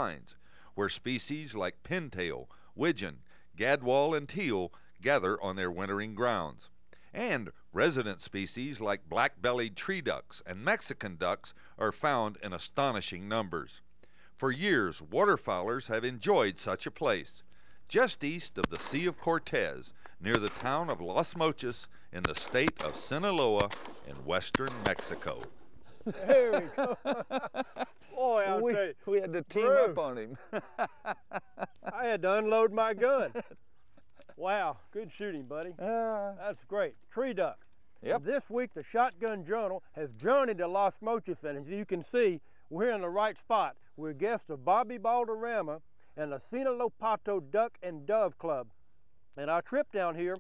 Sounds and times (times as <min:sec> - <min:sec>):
Speech: 0:00.0 - 0:13.8, 0:14.4 - 0:25.5, 0:26.2 - 0:26.9, 0:28.1 - 0:30.4, 0:31.9 - 0:33.5, 0:34.4 - 0:48.7, 0:49.4 - 0:50.4.